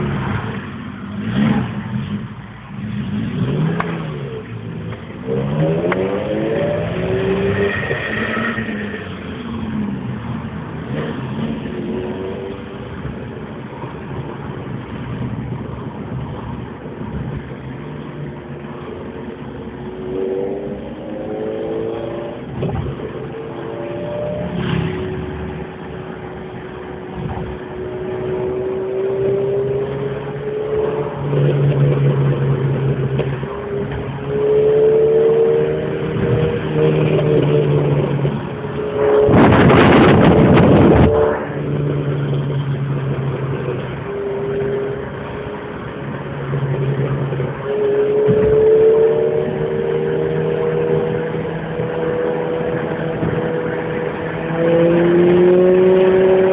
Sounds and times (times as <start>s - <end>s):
Car: 0.0s - 56.5s
Accelerating, revving, vroom: 1.2s - 2.2s, 2.8s - 4.4s, 5.2s - 9.0s, 10.8s - 12.7s, 19.9s - 25.4s, 27.4s - 42.4s, 47.4s - 56.5s.